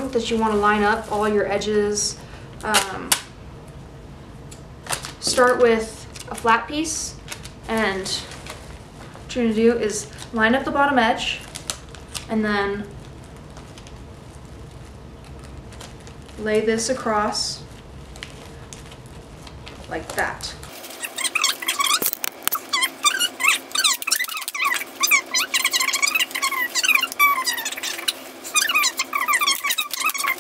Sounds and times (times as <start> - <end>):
Speech: 0.0 - 3.2, 5.2 - 8.3, 9.3 - 11.5, 12.3 - 12.9, 16.4 - 17.7, 19.9 - 20.7
Inside, small room: 0.0 - 30.4.